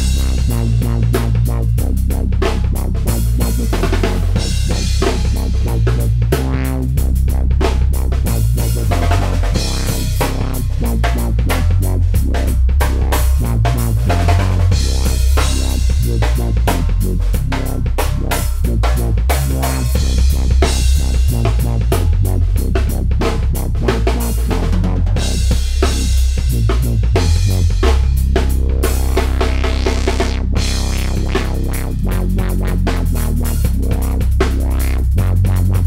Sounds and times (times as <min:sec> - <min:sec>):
Dubstep: 0:00.0 - 0:35.8.